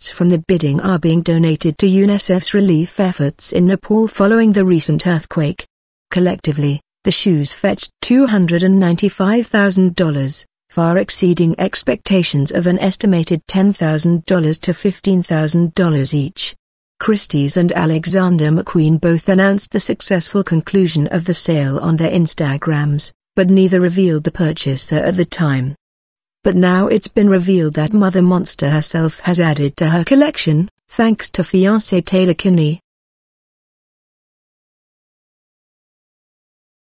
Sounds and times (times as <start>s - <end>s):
Speech: 0.0s - 25.8s, 26.5s - 32.8s.